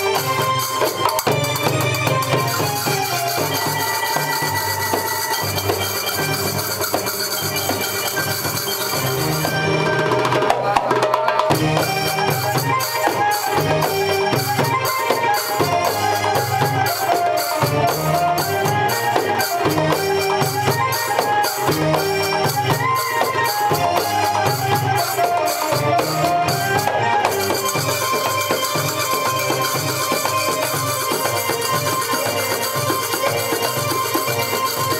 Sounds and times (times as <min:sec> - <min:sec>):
Music: 0:00.0 - 0:34.9.